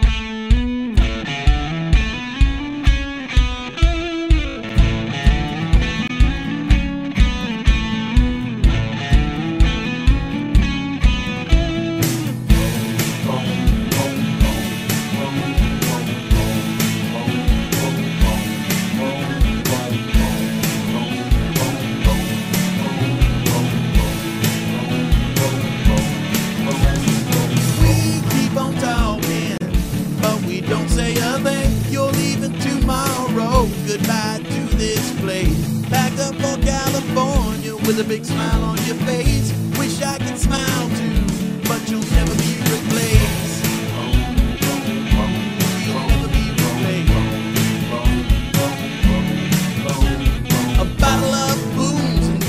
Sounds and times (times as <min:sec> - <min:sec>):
Music: 0:00.0 - 0:52.4.